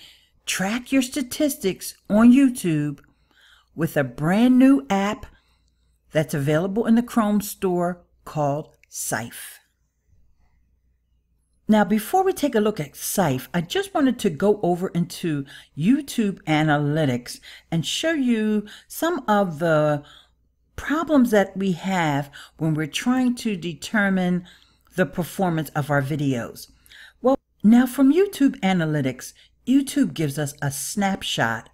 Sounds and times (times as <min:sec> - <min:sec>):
Narration, monologue: 0:00.0 - 0:31.7.